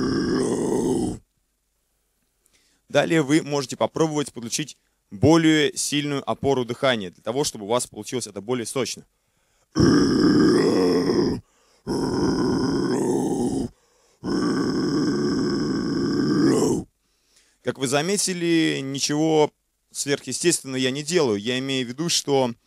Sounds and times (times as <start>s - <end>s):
Grunt: 0.0s - 1.2s, 9.8s - 16.9s
Speech: 2.9s - 9.1s, 17.6s - 22.6s.